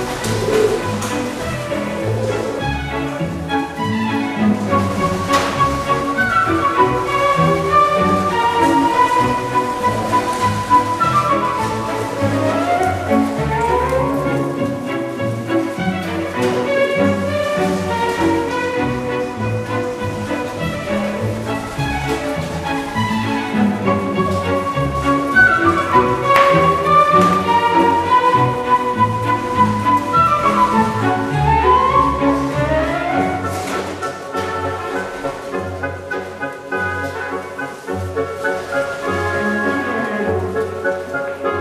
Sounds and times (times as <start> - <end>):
Inside, large room or hall: 0.0 - 41.6
Music: 0.0 - 41.6.